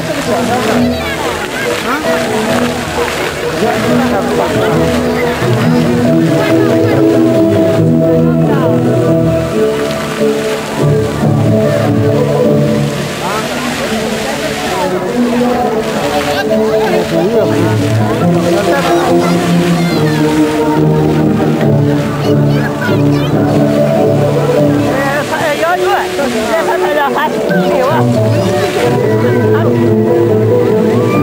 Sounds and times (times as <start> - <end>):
Speech: 0.0 - 9.0, 13.1 - 20.5, 22.1 - 29.9
Music: 0.0 - 31.2.